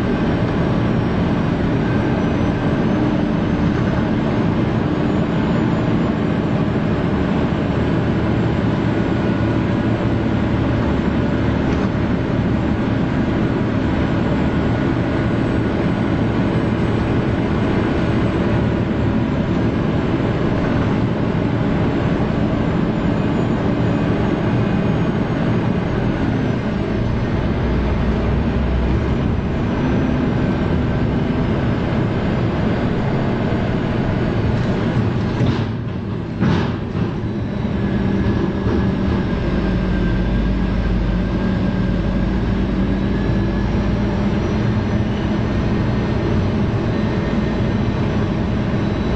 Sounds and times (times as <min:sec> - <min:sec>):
Vehicle: 0:00.0 - 0:49.1.